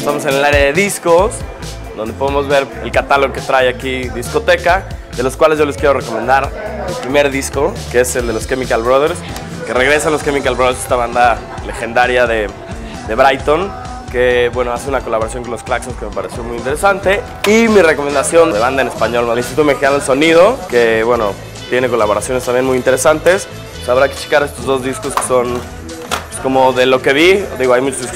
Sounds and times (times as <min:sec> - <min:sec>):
Speech: 0:00.0 - 0:01.4, 0:02.0 - 0:25.7, 0:26.3 - 0:28.1.